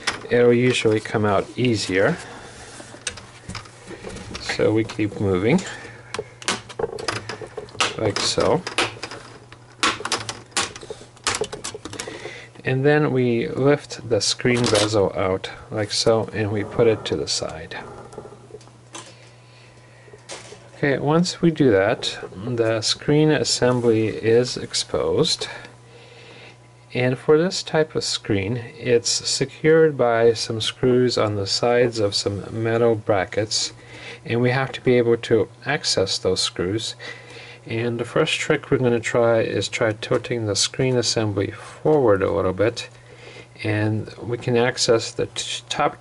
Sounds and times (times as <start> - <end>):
Inside, small room: 0.0 - 46.0
Speech: 0.3 - 2.2, 4.4 - 5.8, 7.9 - 8.7, 12.6 - 17.9, 20.8 - 25.7, 26.9 - 37.0, 37.7 - 42.9, 43.6 - 46.0.